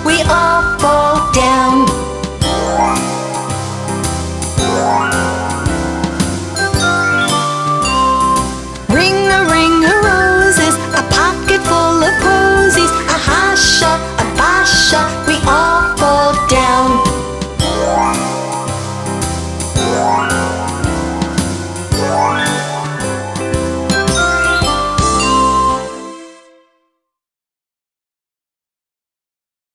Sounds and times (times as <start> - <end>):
Music for children: 0.0 - 26.9
Singing: 8.9 - 17.1.